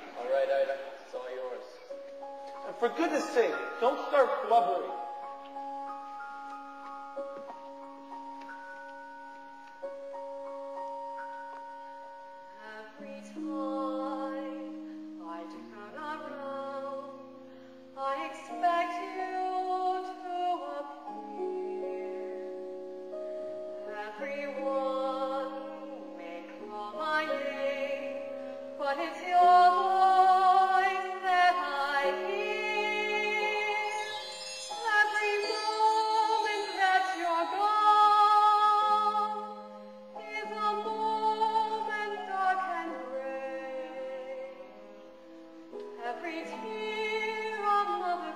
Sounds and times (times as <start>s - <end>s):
Opera: 0.0s - 48.3s.